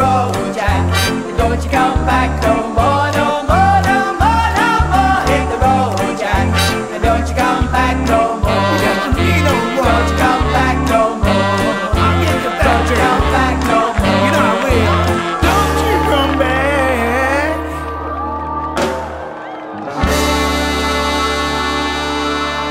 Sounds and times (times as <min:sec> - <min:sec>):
Singing: 0:00.0 - 0:18.9
Music: 0:00.0 - 0:22.7.